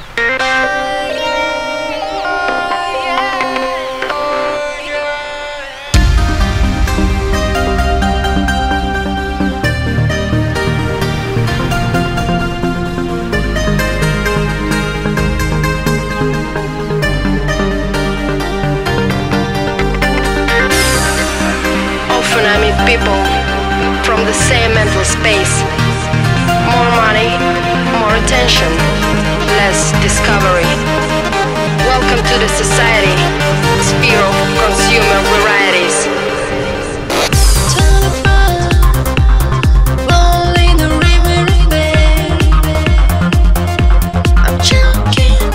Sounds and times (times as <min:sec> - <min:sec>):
Soundtrack music: 0:00.1 - 0:45.5
Speech: 0:22.1 - 0:31.1, 0:31.8 - 0:36.4, 0:44.4 - 0:45.5.